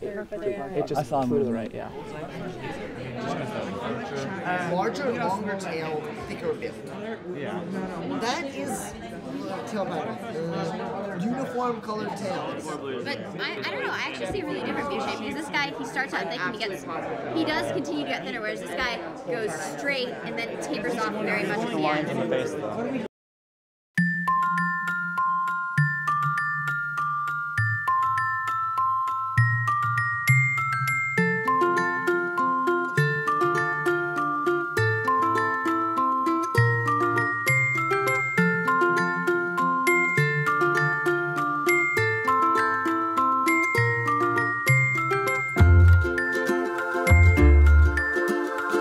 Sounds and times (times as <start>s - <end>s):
Glockenspiel: 24.0s - 48.8s.